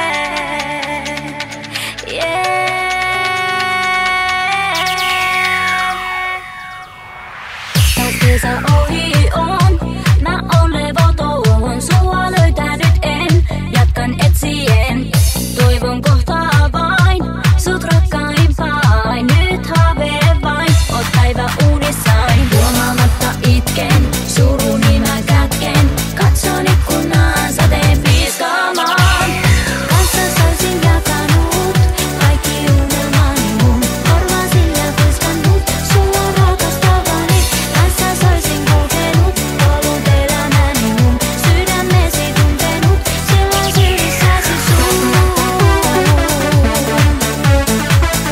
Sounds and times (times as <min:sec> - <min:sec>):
Music: 0:00.0 - 0:48.3.